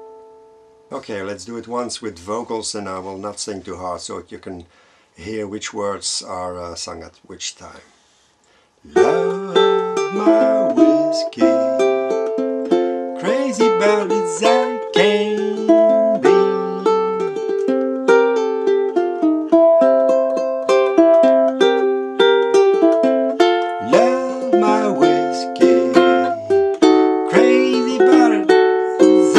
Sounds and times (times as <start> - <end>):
Inside, small room: 0.0 - 29.3
Speech: 0.9 - 7.9, 8.9 - 11.6
Ukulele: 8.9 - 29.3.